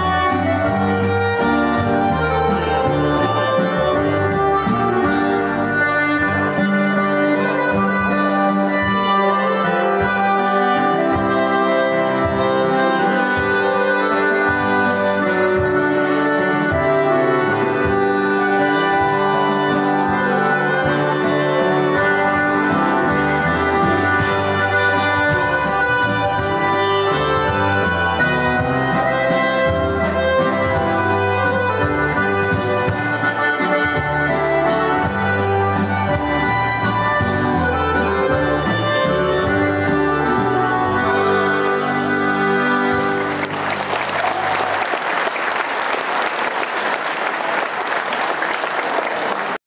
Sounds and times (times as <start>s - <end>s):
Accordion: 0.0s - 49.6s
Applause: 42.9s - 49.6s.